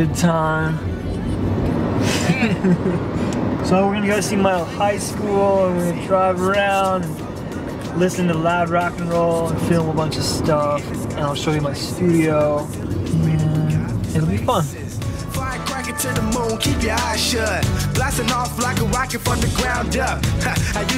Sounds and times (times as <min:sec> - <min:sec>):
Speech: 0:03.7 - 0:07.2, 0:08.0 - 0:14.9
Music: 0:04.9 - 0:20.9.